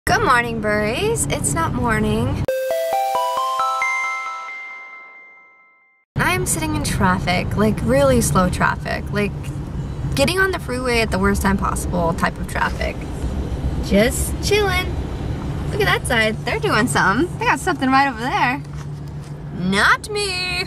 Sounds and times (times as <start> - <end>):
Car: 0.1 - 2.4, 6.2 - 20.6
Music: 2.5 - 5.2
Speech: 6.2 - 9.4.